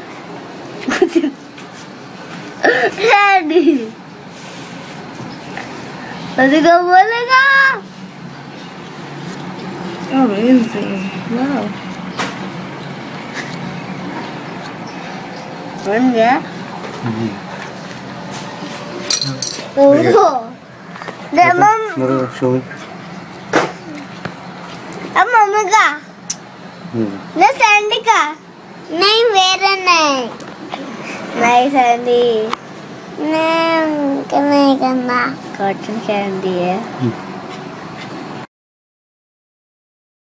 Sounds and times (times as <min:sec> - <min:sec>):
Child speech, kid speaking: 0:02.9 - 0:04.0, 0:06.4 - 0:07.9, 0:19.7 - 0:20.6, 0:21.3 - 0:22.5, 0:25.1 - 0:26.1, 0:27.4 - 0:32.6, 0:33.2 - 0:36.9.